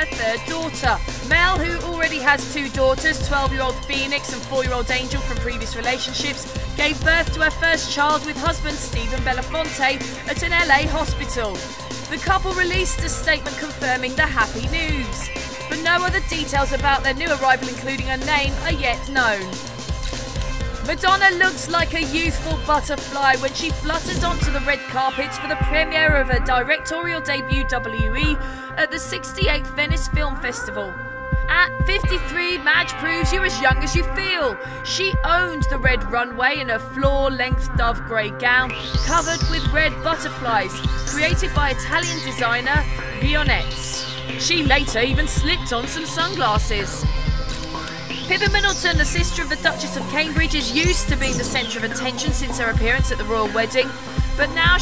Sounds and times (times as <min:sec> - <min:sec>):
Speech: 0:00.0 - 0:19.5, 0:20.9 - 0:47.1, 0:48.3 - 0:54.8
Music: 0:00.0 - 0:54.8.